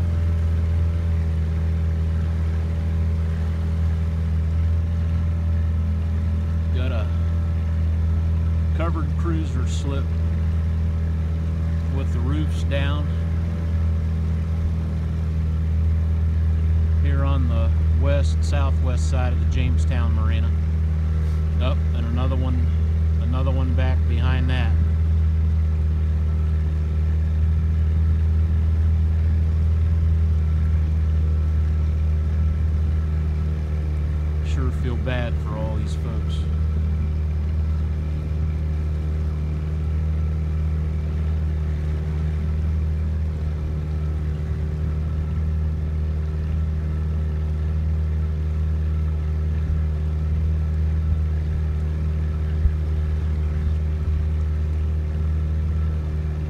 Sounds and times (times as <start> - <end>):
Boat, Water vehicle: 0.0 - 56.4
Outside, rural or natural: 0.0 - 56.4
Speech: 6.7 - 7.3, 8.8 - 10.1, 11.9 - 13.2, 17.0 - 20.6, 21.6 - 24.9, 34.4 - 36.5.